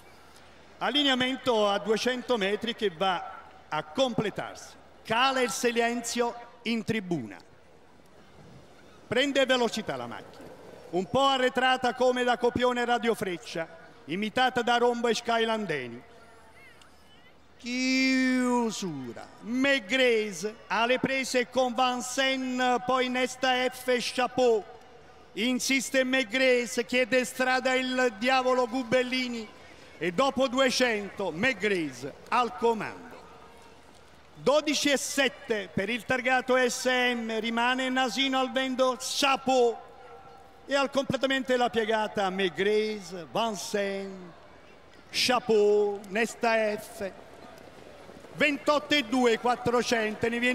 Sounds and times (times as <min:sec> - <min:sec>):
Speech: 0:00.8 - 0:07.4, 0:09.1 - 0:10.3, 0:11.0 - 0:16.0, 0:17.6 - 0:24.7, 0:25.4 - 0:33.3, 0:34.4 - 0:39.8, 0:40.7 - 0:44.3, 0:45.1 - 0:47.2, 0:48.4 - 0:50.5.